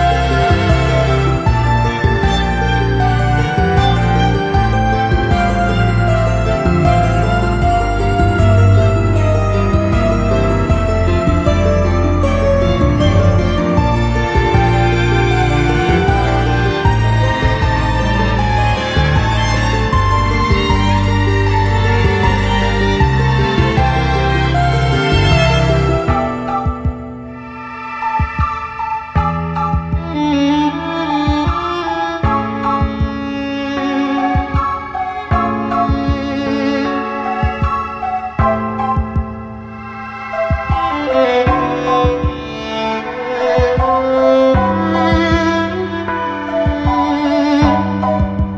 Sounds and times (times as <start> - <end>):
Video game music: 0.0 - 48.5.